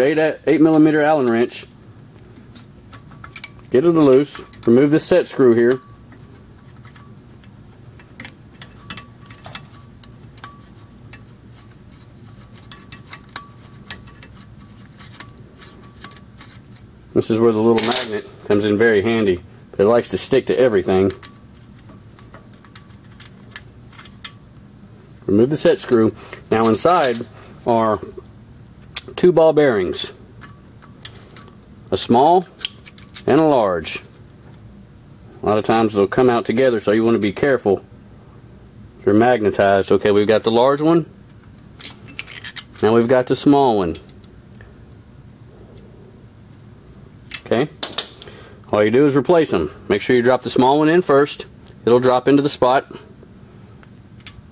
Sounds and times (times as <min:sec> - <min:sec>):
Speech: 0:00.0 - 0:01.7, 0:03.7 - 0:05.8, 0:17.2 - 0:21.2, 0:25.3 - 0:28.2, 0:29.2 - 0:30.2, 0:31.9 - 0:32.5, 0:33.2 - 0:34.1, 0:35.4 - 0:37.8, 0:39.0 - 0:41.1, 0:42.8 - 0:44.1, 0:47.4 - 0:47.8, 0:48.7 - 0:53.0
Tools: 0:02.9 - 0:04.8, 0:08.2 - 0:16.8, 0:32.6 - 0:33.3, 0:41.8 - 0:42.8.